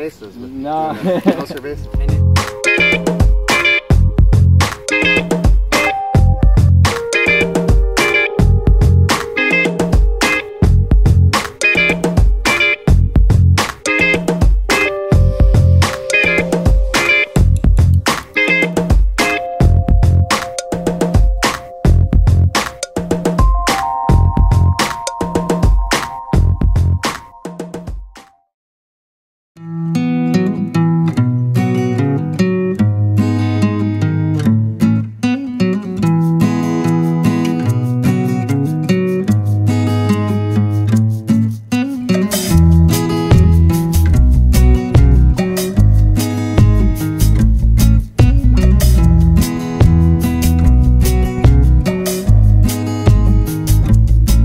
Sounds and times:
Music: 1.1 - 28.5, 29.6 - 54.4.

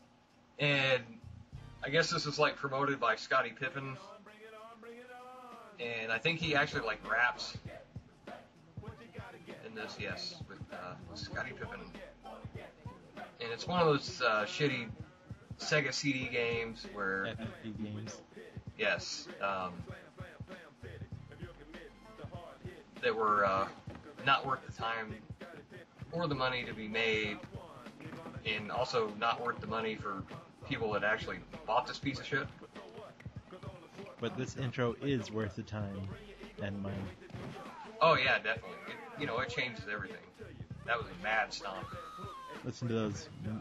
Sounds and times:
Music: 0.0 - 43.6
Speech: 0.6 - 1.2, 1.8 - 4.1, 5.8 - 7.6, 9.6 - 11.9, 13.4 - 15.0, 15.6 - 18.2, 18.8 - 19.8, 23.0 - 25.2, 26.1 - 27.4, 28.4 - 32.5, 34.2 - 37.2, 38.0 - 42.0, 42.7 - 43.6.

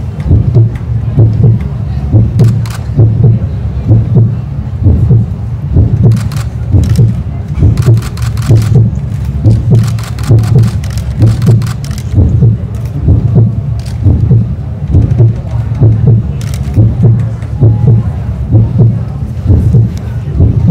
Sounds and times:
Heart sounds, heartbeat: 0.2 - 20.7
Speech: 0.8 - 8.1, 14.9 - 20.7.

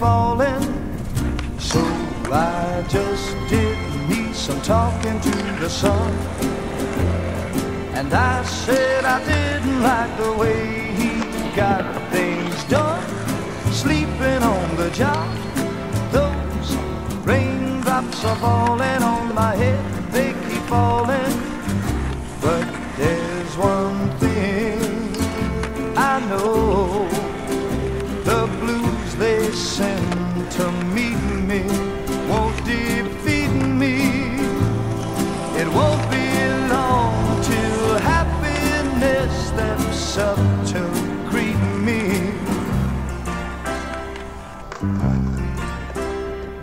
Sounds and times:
Music: 0.0 - 46.6
Skateboard: 0.0 - 46.6.

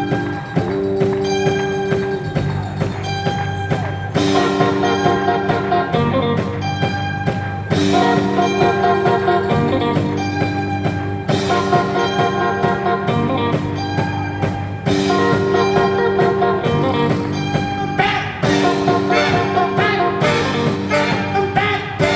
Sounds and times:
Music: 0.0 - 22.1.

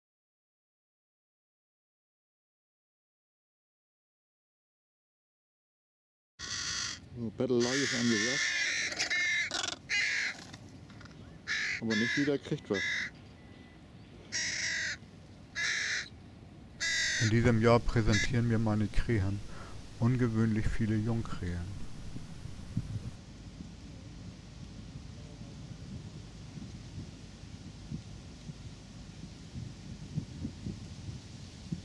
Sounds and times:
Crow: 6.4 - 13.2, 14.3 - 15.0, 15.6 - 16.1, 16.8 - 18.5
Speech: 7.2 - 8.4, 11.8 - 12.9, 17.2 - 21.8.

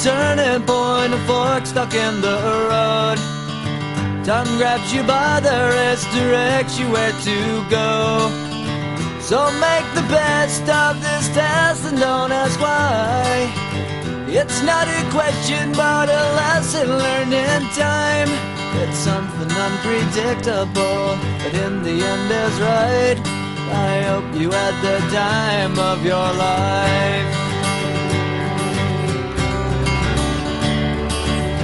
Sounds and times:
Music: 0.0 - 31.6.

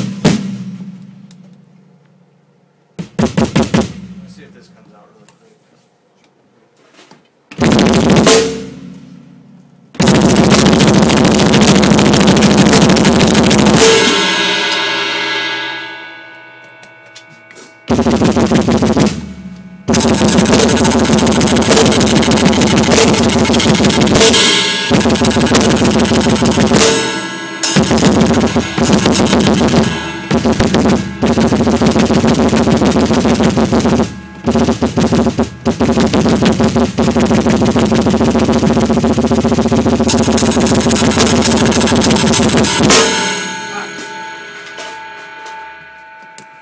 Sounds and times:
Bass drum: 0.0 - 1.8, 3.0 - 4.5, 7.6 - 14.8, 17.9 - 44.3
Drum kit: 0.0 - 5.1, 7.5 - 46.6
Speech: 4.2 - 5.9, 43.7 - 44.2.

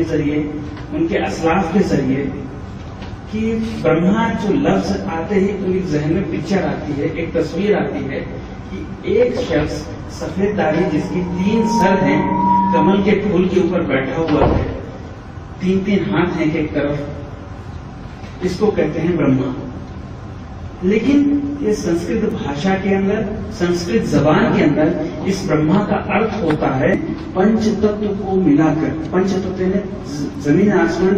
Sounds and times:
Speech: 0.0 - 2.5, 3.3 - 14.8, 15.6 - 17.2, 18.4 - 19.8, 20.8 - 31.1.

